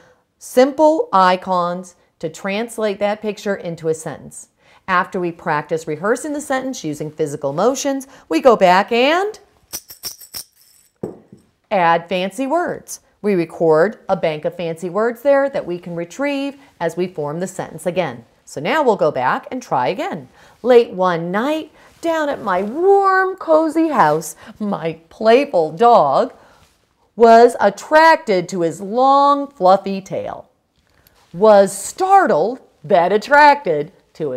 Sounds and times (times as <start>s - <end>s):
Speech: 0.4s - 9.4s, 11.7s - 26.4s, 27.2s - 30.5s, 31.4s - 34.3s.